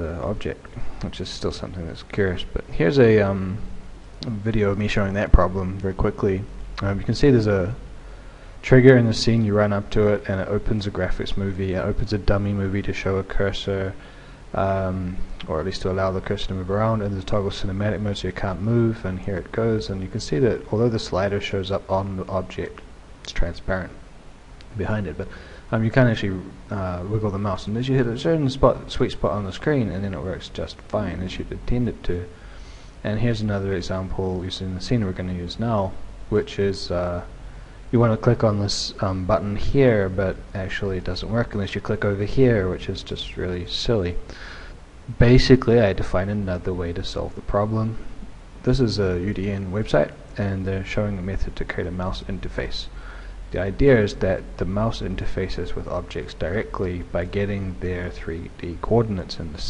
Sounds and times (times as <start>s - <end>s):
Speech: 0.0s - 7.9s, 8.6s - 24.0s, 24.7s - 32.4s, 33.0s - 44.3s, 45.1s - 59.6s.